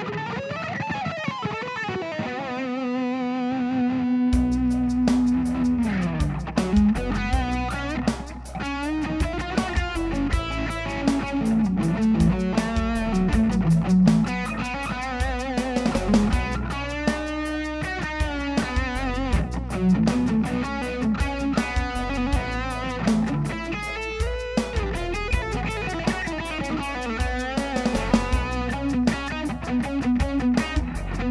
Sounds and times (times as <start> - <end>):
Guitar: 0.0 - 31.3.